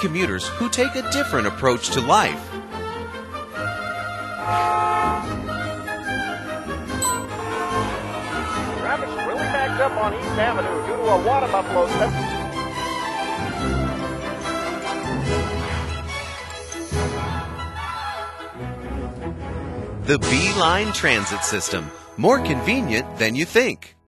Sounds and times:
Speech: 0.0 - 2.5, 20.1 - 24.0
Music: 0.0 - 24.0.

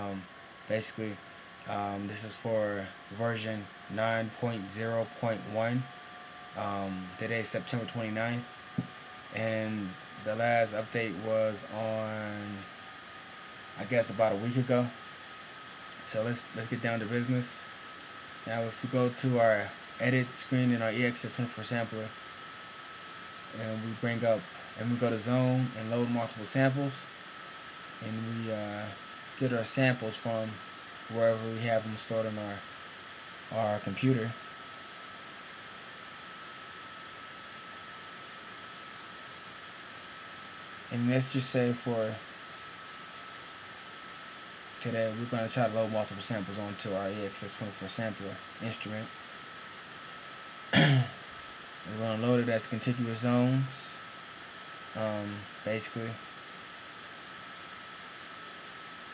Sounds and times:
Speech: 0.0 - 5.9, 6.6 - 8.5, 9.3 - 12.7, 13.8 - 15.0, 16.0 - 17.7, 18.4 - 22.2, 23.5 - 27.1, 28.0 - 32.7, 33.5 - 34.4, 40.9 - 42.3, 44.8 - 49.1, 51.8 - 54.0, 54.9 - 56.2.

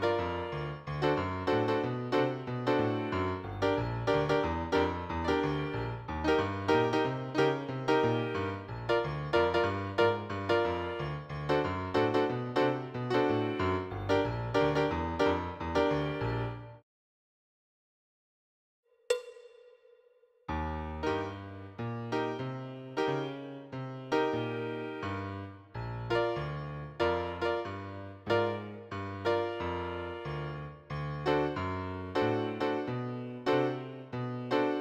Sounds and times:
Piano: 0.0 - 16.8, 20.5 - 34.8.

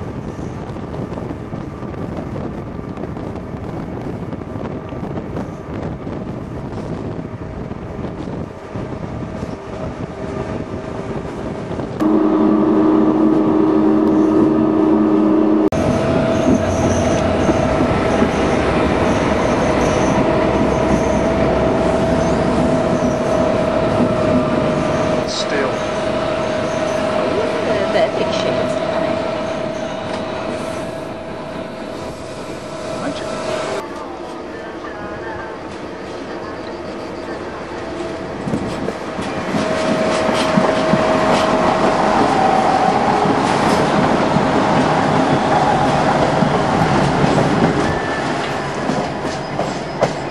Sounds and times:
Railroad car, train wagon: 0.0 - 50.3
Train: 0.0 - 50.3
Clickety-clack: 38.5 - 42.5, 43.1 - 50.3.

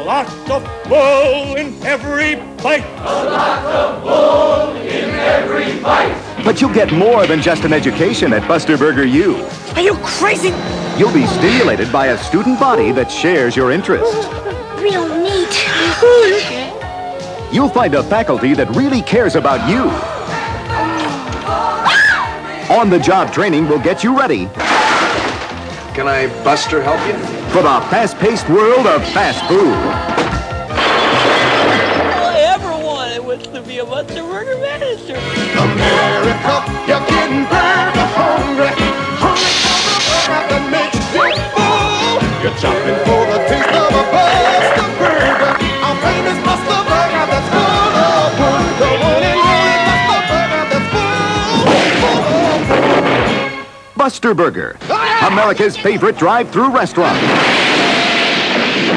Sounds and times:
Music: 0.0 - 58.9.

